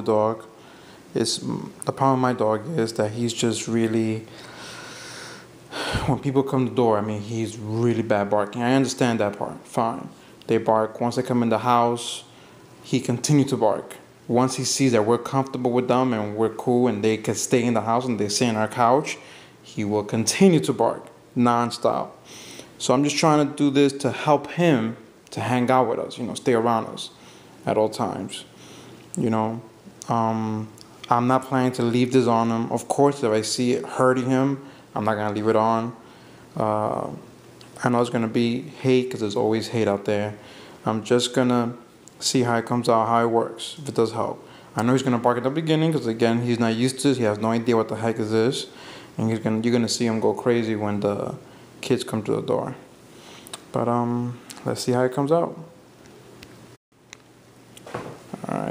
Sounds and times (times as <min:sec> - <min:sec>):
Speech: 0:00.0 - 0:04.3, 0:05.8 - 0:22.2, 0:22.8 - 0:36.0, 0:36.6 - 0:52.9, 0:53.6 - 0:55.8, 0:58.4 - 0:58.7.